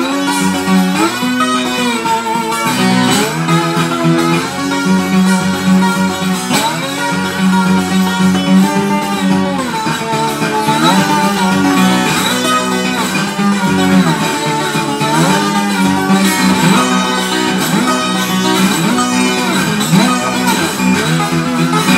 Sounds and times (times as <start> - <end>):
Acoustic guitar: 0.0 - 21.9.